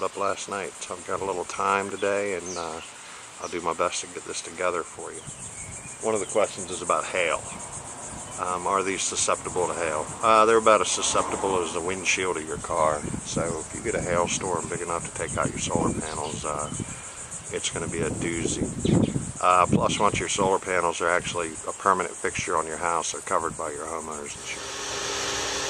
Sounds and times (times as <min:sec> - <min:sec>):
Speech: 0:00.0 - 0:05.2, 0:06.0 - 0:07.5, 0:08.4 - 0:16.8, 0:17.5 - 0:18.8, 0:19.4 - 0:24.6.